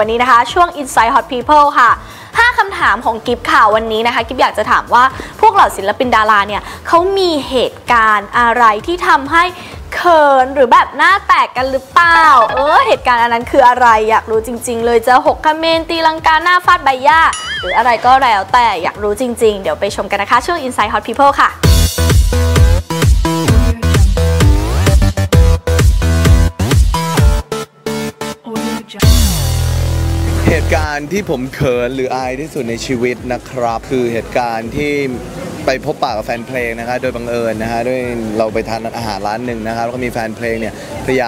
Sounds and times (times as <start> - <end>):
Music: 0.0 - 41.2.